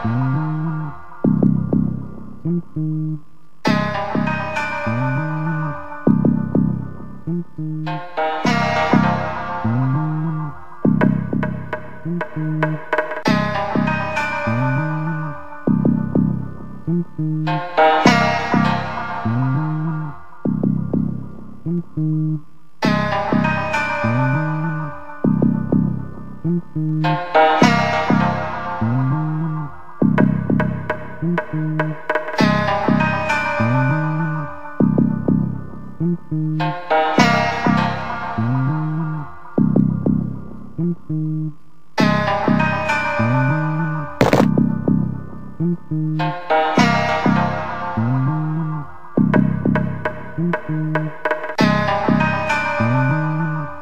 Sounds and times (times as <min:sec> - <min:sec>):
Blues: 0:00.0 - 0:53.8.